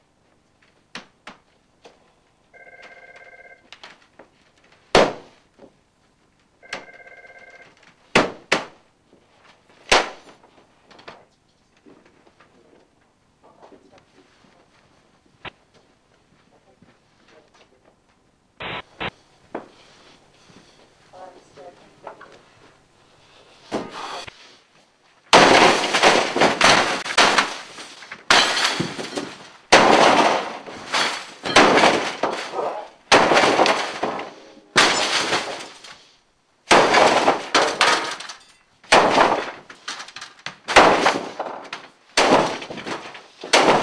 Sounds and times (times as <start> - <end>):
Smash, crash: 25.3 - 35.9, 36.7 - 39.7, 40.7 - 43.8.